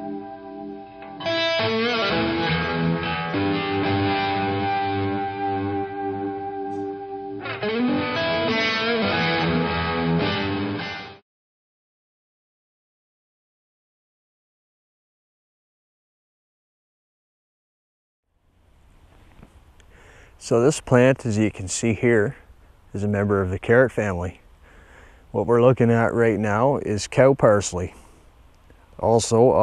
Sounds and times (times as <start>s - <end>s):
Music: 0.0s - 11.2s.